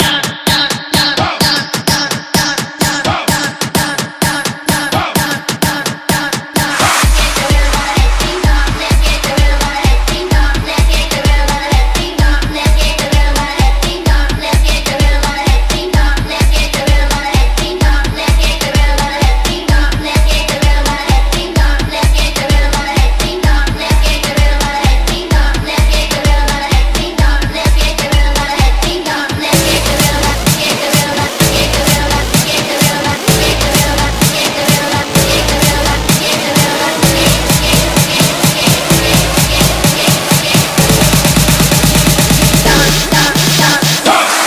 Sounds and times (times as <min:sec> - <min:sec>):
Music: 0:00.0 - 0:44.4.